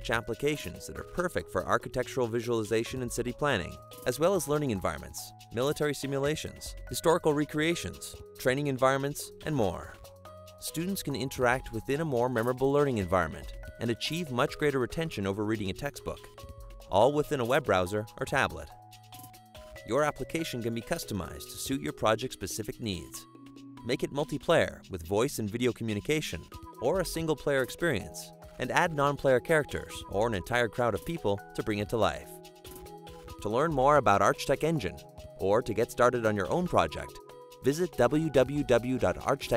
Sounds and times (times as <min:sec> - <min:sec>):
Speech: 0:00.0 - 0:10.0, 0:10.6 - 0:16.3, 0:16.9 - 0:18.7, 0:19.9 - 0:32.3, 0:33.4 - 0:39.5
Music: 0:00.0 - 0:39.5.